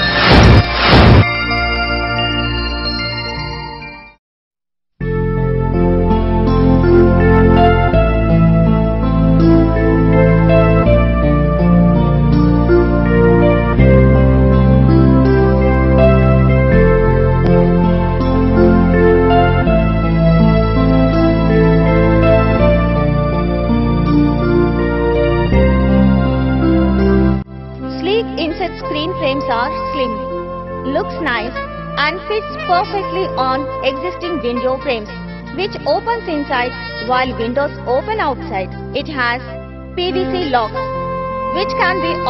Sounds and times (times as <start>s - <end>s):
Music: 0.0s - 4.2s, 5.0s - 42.2s
Speech: 27.9s - 30.2s, 30.9s - 40.8s, 41.6s - 42.2s.